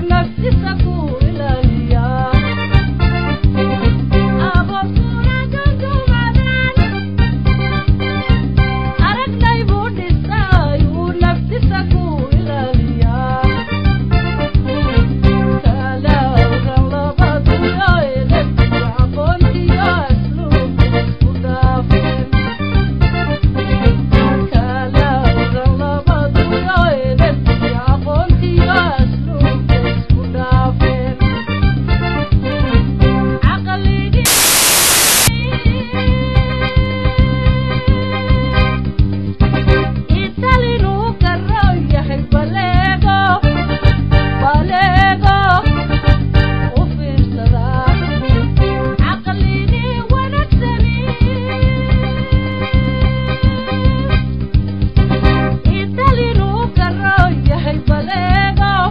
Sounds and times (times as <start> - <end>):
Happy music: 0.0 - 25.6, 47.8 - 49.3, 50.0 - 58.9.